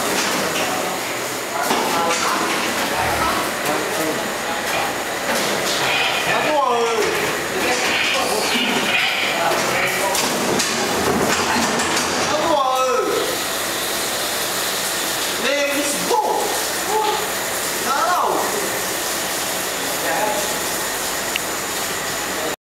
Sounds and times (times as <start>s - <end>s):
Speech: 0.6s - 5.0s, 6.2s - 10.4s, 12.2s - 13.4s, 15.4s - 18.8s, 20.0s - 20.6s.